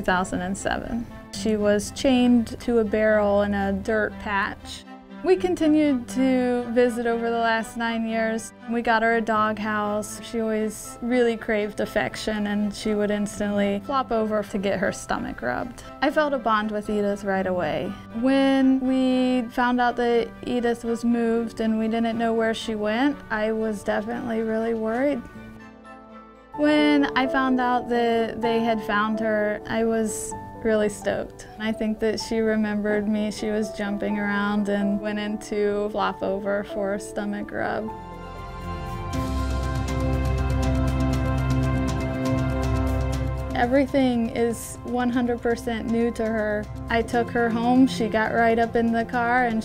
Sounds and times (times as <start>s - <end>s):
Speech: 0.0s - 25.2s, 26.6s - 37.9s, 43.6s - 49.6s
Music: 0.0s - 49.6s.